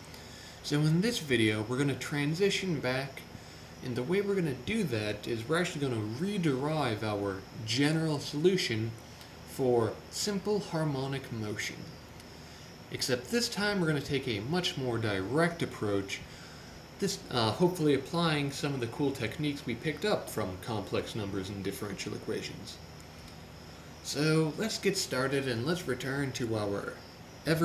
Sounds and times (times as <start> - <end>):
Speech: 0.6 - 11.9, 12.9 - 16.3, 17.0 - 22.8, 24.0 - 27.6.